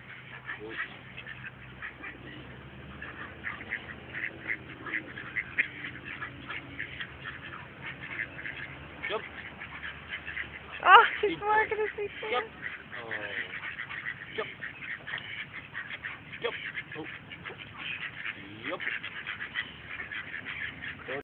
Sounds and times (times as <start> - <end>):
Quack: 0.0 - 21.2.